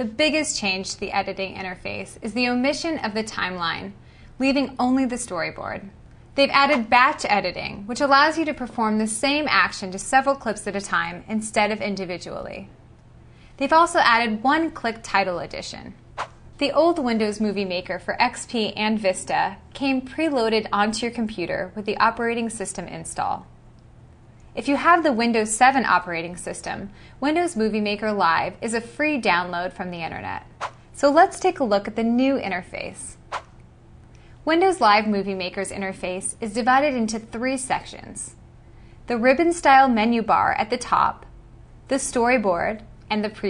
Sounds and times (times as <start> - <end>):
Speech: 0.0 - 12.7, 13.6 - 16.0, 16.6 - 23.5, 24.6 - 33.2, 34.4 - 38.4, 39.1 - 41.3, 41.9 - 43.4.